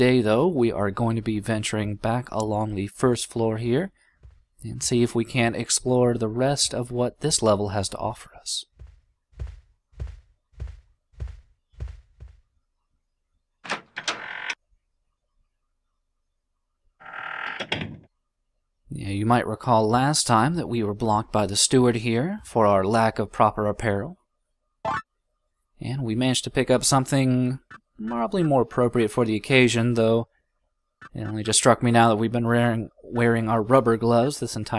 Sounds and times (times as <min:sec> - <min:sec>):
Speech: 0:00.0 - 0:03.9, 0:04.6 - 0:08.7, 0:18.9 - 0:24.2, 0:25.8 - 0:30.3, 0:31.1 - 0:34.7.